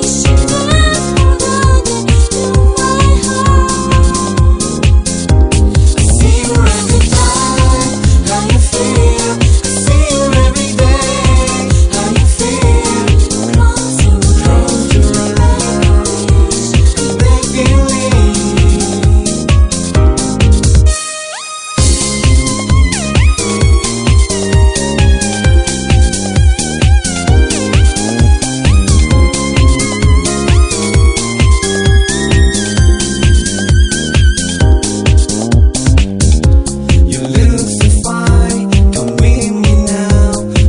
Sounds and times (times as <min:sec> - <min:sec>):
Electronica: 0:00.0 - 0:40.6.